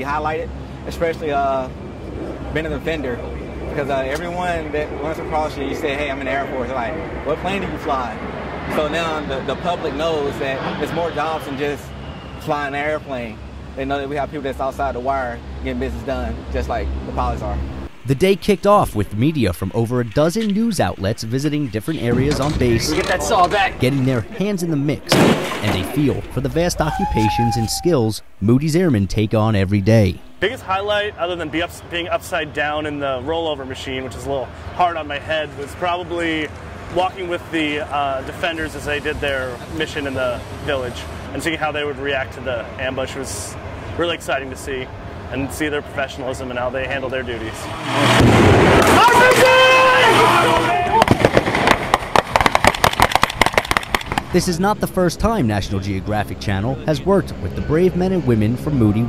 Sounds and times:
Speech: 0.0 - 1.7, 2.5 - 11.8, 12.4 - 47.7, 54.3 - 59.0
Outside, rural or natural: 0.0 - 59.0.

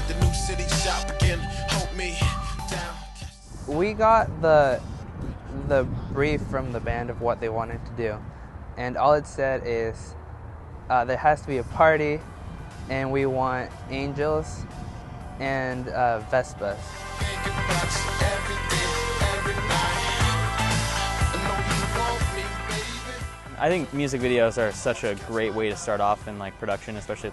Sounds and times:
Music: 0.0 - 4.0, 12.2 - 27.3
Speech: 3.7 - 4.8, 5.5 - 8.2, 8.8 - 10.2, 10.9 - 12.2, 12.9 - 14.6, 15.4 - 16.9, 23.6 - 27.3.

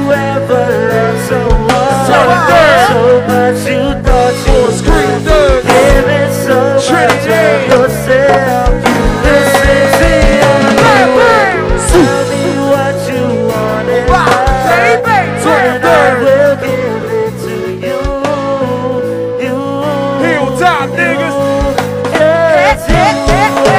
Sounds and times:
Music: 0.0 - 23.7.

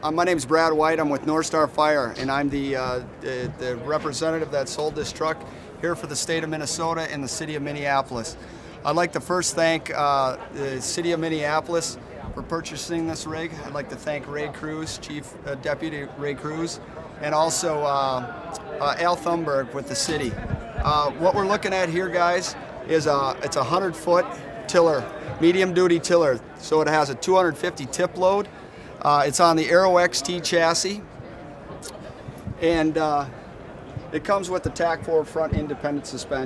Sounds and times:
Speech: 0.0 - 31.1, 32.6 - 33.4, 34.0 - 36.4.

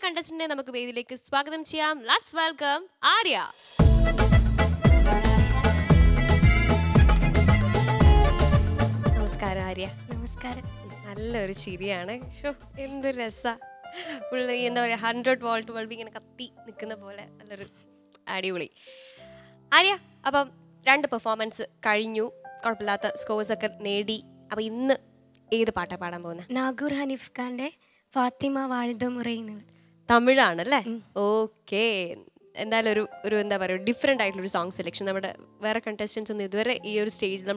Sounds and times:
Music: 3.5 - 37.5.

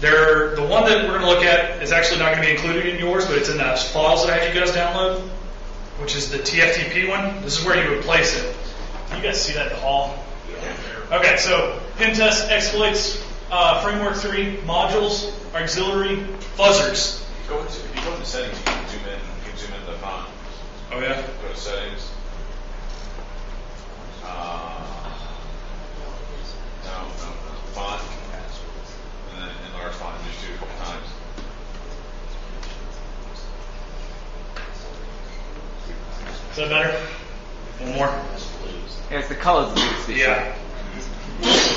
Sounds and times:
Speech: 0.0 - 5.4, 6.0 - 22.2, 24.2 - 31.3, 35.8 - 41.7.

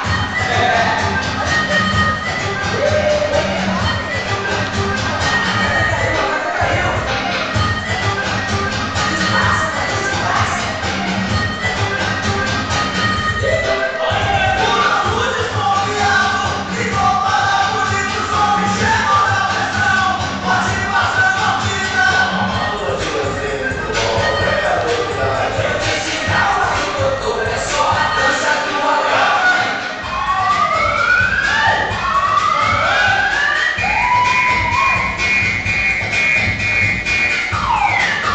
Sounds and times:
Music: 0.0 - 38.3.

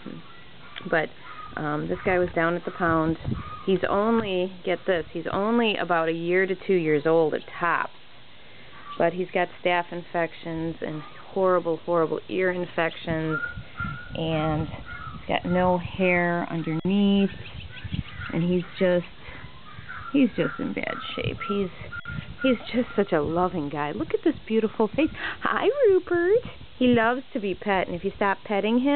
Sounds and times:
Speech: 0.8 - 7.9, 9.0 - 13.5, 14.2 - 17.4, 18.3 - 19.1, 20.2 - 21.8, 22.4 - 28.9.

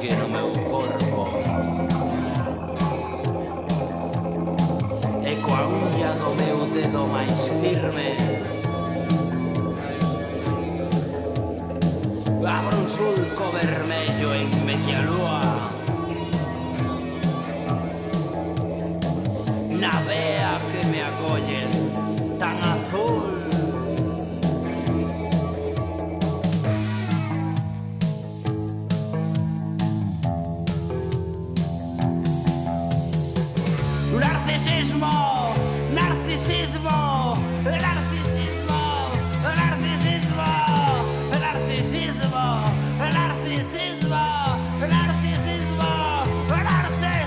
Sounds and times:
Music: 0.0 - 47.2.

